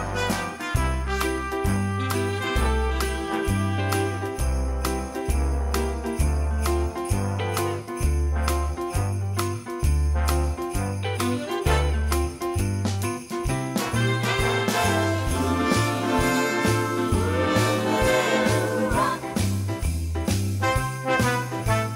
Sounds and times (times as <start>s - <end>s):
Jingle bell: 0.0s - 21.9s.